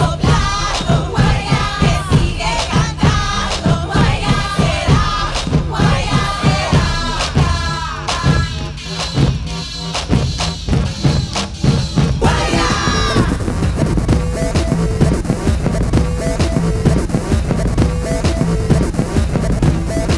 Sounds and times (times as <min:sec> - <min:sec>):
Electronic music: 0:00.0 - 0:20.1
Sampler: 0:12.2 - 0:20.1.